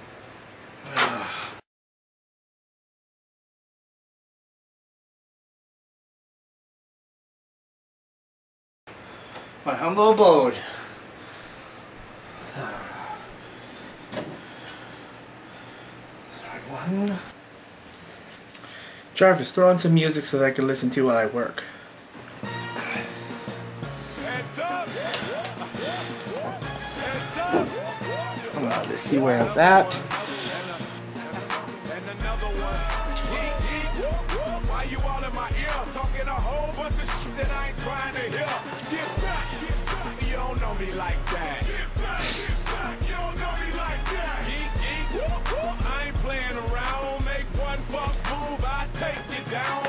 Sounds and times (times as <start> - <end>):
Speech: 9.7 - 10.7, 16.4 - 17.3, 19.2 - 21.7, 28.6 - 30.0.